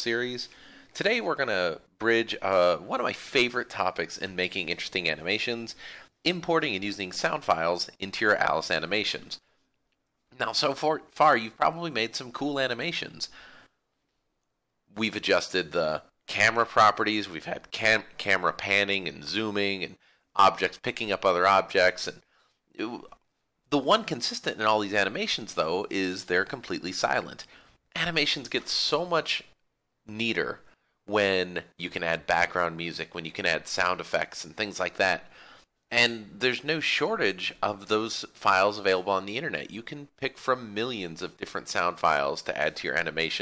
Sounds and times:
Speech: 0.0 - 9.4, 10.4 - 13.4, 14.9 - 22.2, 22.8 - 35.3, 35.9 - 43.4.

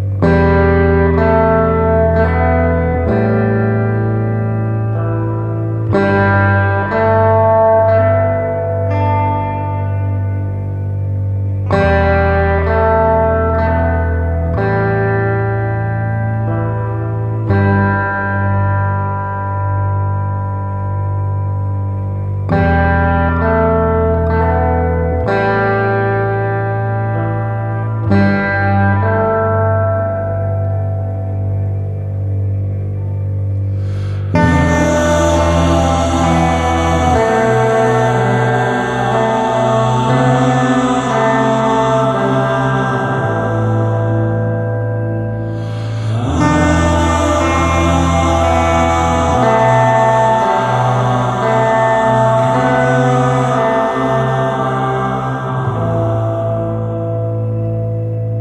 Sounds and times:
Music: 0.0 - 58.4.

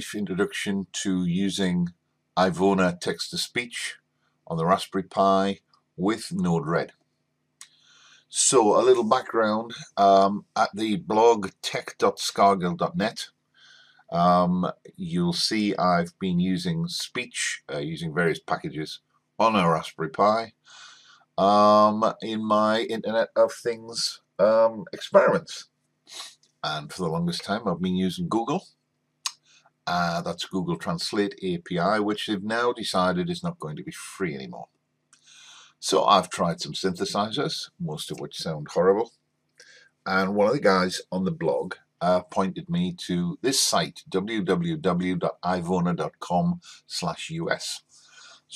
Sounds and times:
Speech: 0.0 - 6.9, 8.3 - 13.3, 14.1 - 28.6, 29.9 - 34.7, 35.4 - 39.1, 40.1 - 48.5.

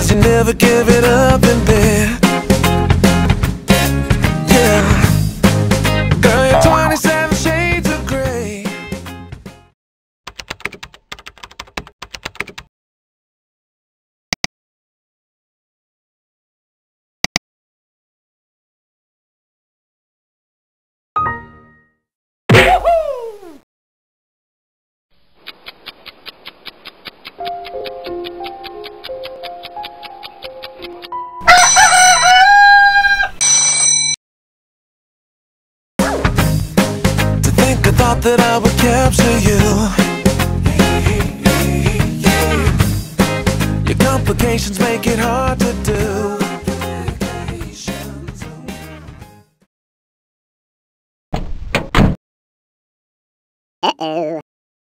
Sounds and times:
Music: 0.0 - 9.8, 21.2 - 22.1, 27.4 - 31.4, 36.0 - 49.6.

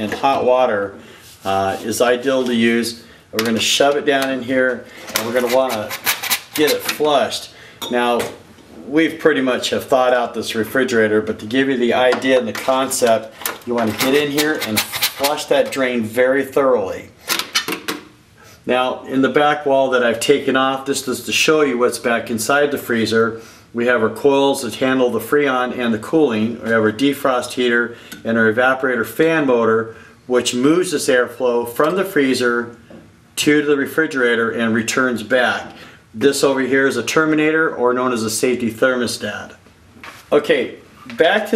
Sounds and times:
Speech: 0.0 - 6.0, 6.6 - 17.2, 18.6 - 32.8, 33.4 - 39.6, 40.3 - 41.5
Inside, small room: 0.0 - 41.5.

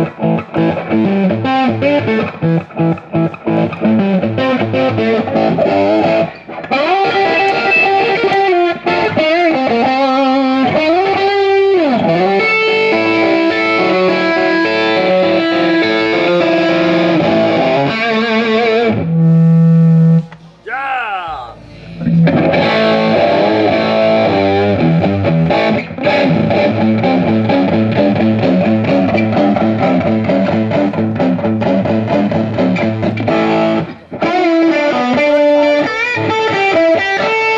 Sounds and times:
Music: 0.0 - 20.4, 21.7 - 37.5.

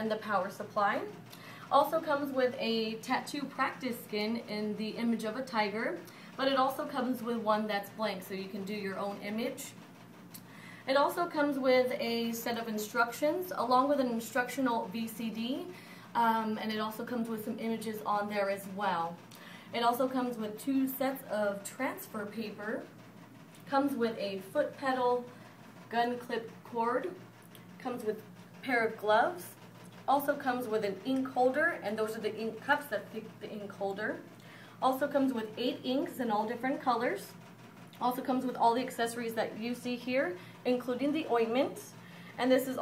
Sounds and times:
Speech: 0.0 - 9.8, 10.9 - 22.9, 23.7 - 25.3, 25.9 - 27.2, 27.8 - 37.4, 38.0 - 42.8.

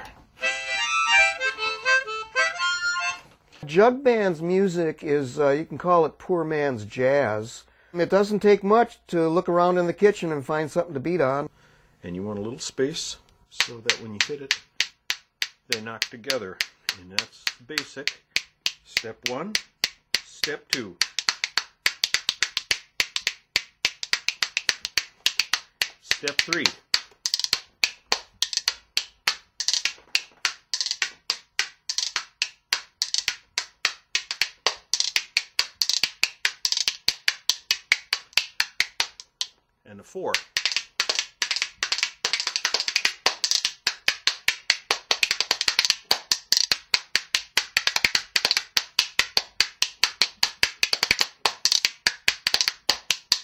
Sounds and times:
Speech: 3.6 - 14.6, 15.7 - 18.2, 18.9 - 19.6, 20.2 - 21.0, 26.0 - 26.8, 39.8 - 40.4.

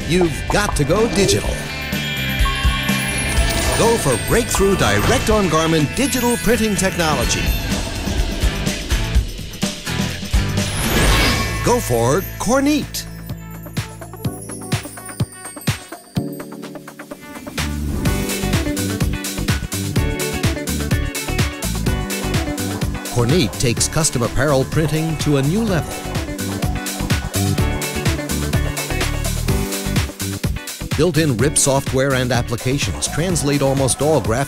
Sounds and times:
Speech: 0.0 - 1.7, 3.8 - 7.5, 11.6 - 13.1, 23.2 - 25.9, 30.9 - 34.4
Music: 0.0 - 34.4.

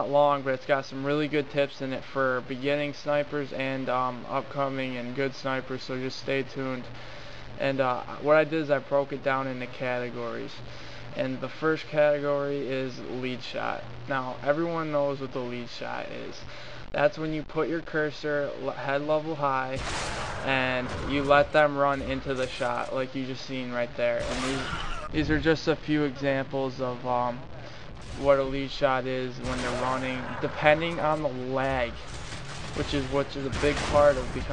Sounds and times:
Speech: 0.0 - 7.0, 7.6 - 19.8, 20.4 - 32.0, 32.8 - 34.5.

